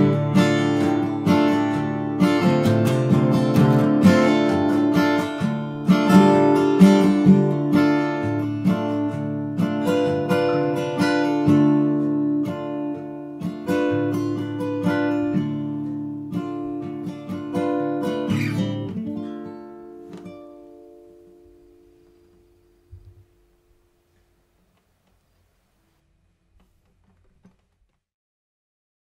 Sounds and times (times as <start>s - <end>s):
Acoustic guitar: 0.0s - 27.7s.